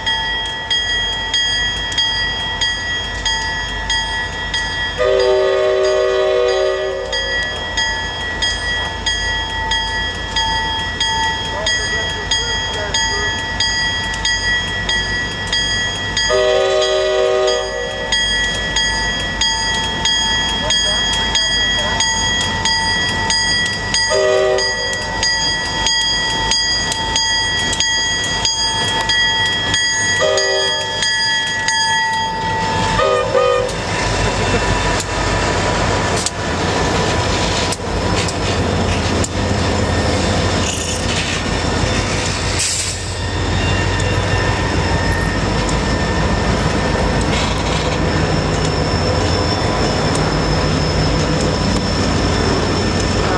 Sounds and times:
Railroad car, train wagon: 0:00.0 - 0:53.3
Train horn: 0:05.0 - 0:07.2, 0:16.3 - 0:18.0, 0:24.1 - 0:24.9, 0:30.2 - 0:30.9, 0:33.0 - 0:33.8.

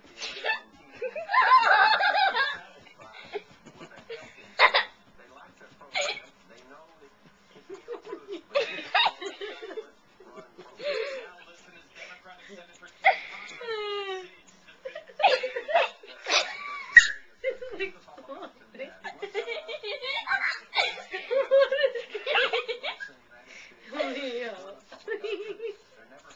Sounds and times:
Speech: 0:00.0 - 0:16.7, 0:17.5 - 0:26.3
Laughter: 0:00.2 - 0:05.0, 0:05.9 - 0:06.3, 0:07.6 - 0:11.2, 0:13.0 - 0:23.2, 0:24.9 - 0:25.9.

